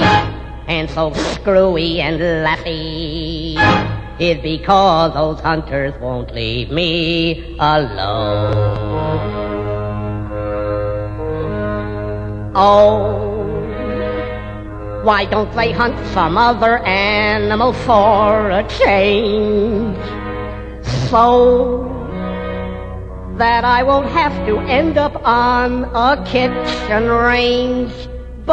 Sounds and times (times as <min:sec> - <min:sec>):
Music: 0:00.0 - 0:28.5.